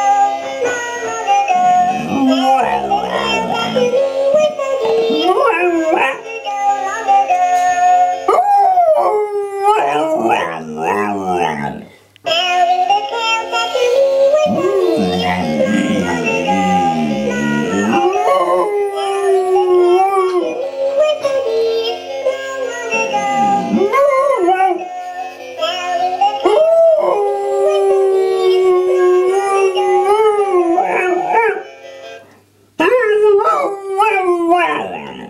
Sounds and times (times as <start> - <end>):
Music: 0.0 - 33.0
Howl: 1.5 - 6.3, 8.3 - 12.0, 14.3 - 21.3, 23.0 - 24.9, 26.4 - 31.7, 32.8 - 35.3.